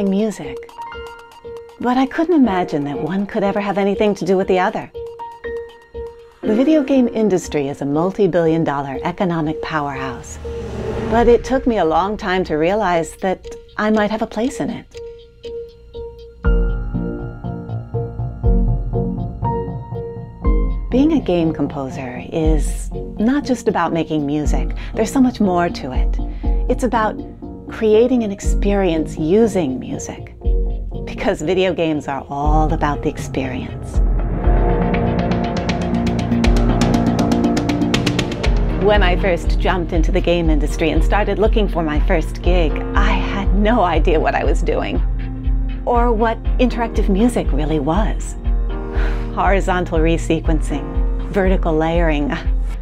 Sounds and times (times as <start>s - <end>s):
Speech: 0.0s - 0.7s, 1.8s - 4.9s, 6.4s - 10.4s, 11.1s - 15.0s, 20.9s - 30.3s, 31.1s - 34.0s, 38.8s - 45.0s, 45.9s - 48.4s, 49.4s - 52.5s
Music: 0.0s - 52.8s.